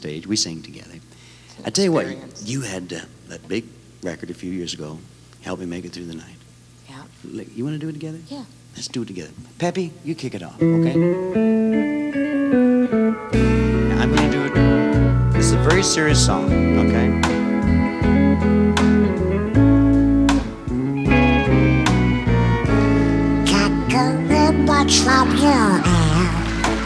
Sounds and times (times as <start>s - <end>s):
Speech: 0.0s - 1.0s, 1.6s - 11.1s, 13.9s - 14.7s, 15.4s - 17.2s
Country: 10.6s - 26.8s
Steel guitar, slide guitar: 10.6s - 26.8s.